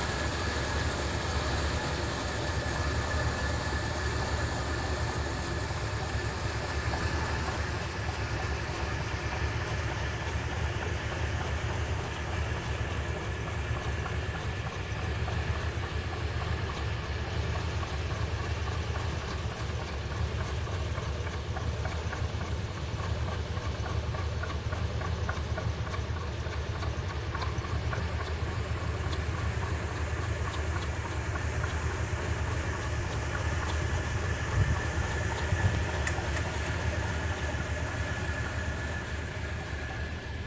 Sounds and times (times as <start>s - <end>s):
Car: 0.0s - 40.4s.